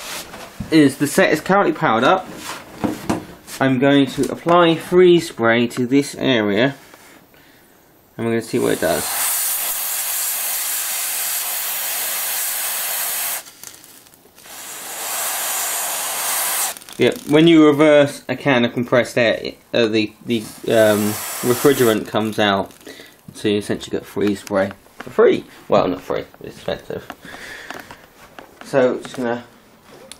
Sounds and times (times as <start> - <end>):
Speech: 0.7 - 2.3, 3.6 - 6.8, 8.2 - 9.1, 17.0 - 22.7, 23.3 - 27.1, 28.6 - 29.6
Hiss: 8.5 - 16.9, 20.5 - 22.1.